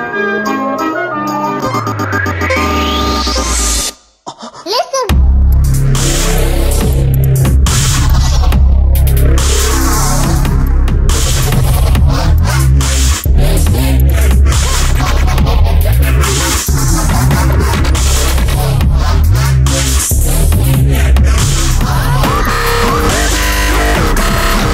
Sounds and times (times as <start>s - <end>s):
Dubstep: 1.7s - 4.0s, 4.7s - 24.7s.